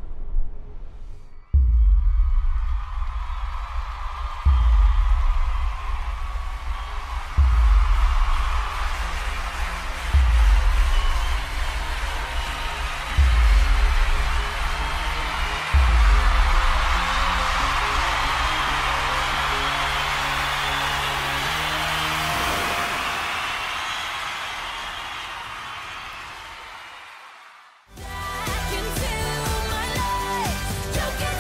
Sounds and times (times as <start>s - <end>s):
Rhythm and blues: 1.6s - 23.8s, 27.9s - 31.4s.